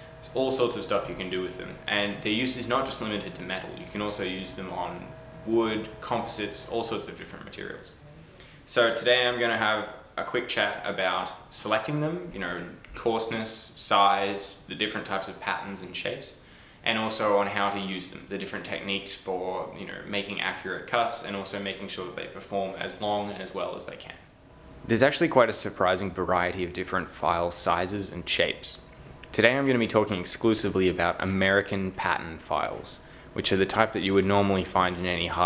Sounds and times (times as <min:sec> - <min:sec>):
Speech: 0:00.2 - 0:24.3, 0:24.9 - 0:35.4.